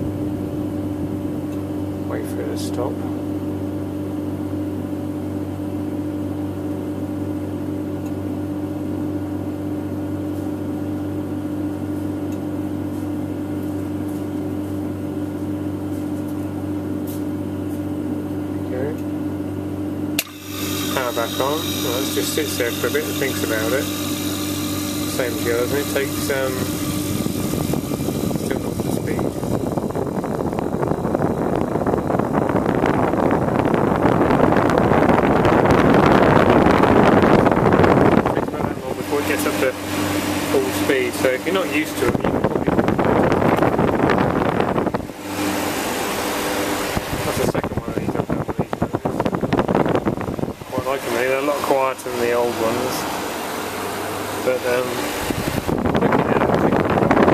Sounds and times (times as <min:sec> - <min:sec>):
Wind noise (microphone): 0:25.1 - 0:40.2, 0:41.6 - 0:45.8, 0:46.8 - 0:51.4, 0:54.9 - 0:57.3.